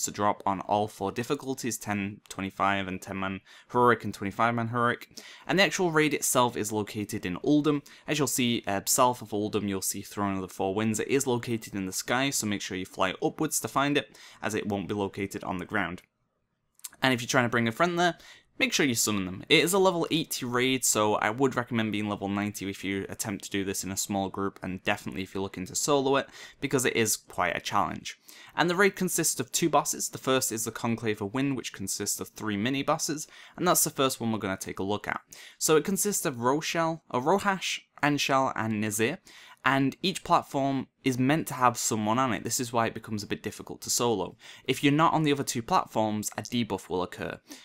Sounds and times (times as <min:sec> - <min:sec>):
Speech: 0:00.0 - 0:16.1, 0:16.9 - 0:47.5.